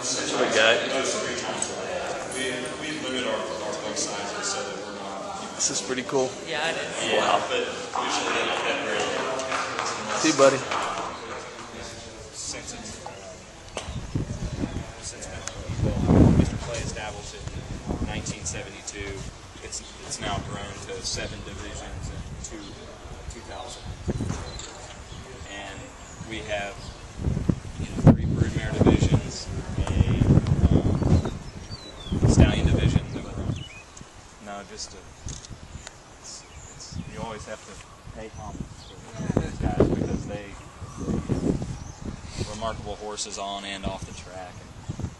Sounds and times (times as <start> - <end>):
Speech: 0.0 - 13.4, 14.4 - 26.8, 27.8 - 31.0, 32.2 - 33.6, 34.4 - 35.0, 36.2 - 40.6, 42.4 - 44.6.